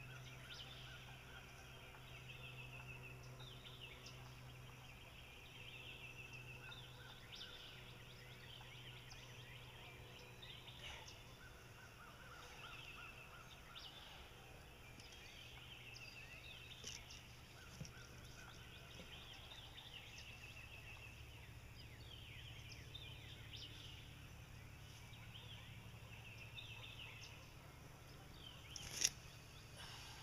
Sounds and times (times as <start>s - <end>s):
Bird: 0.0s - 30.2s.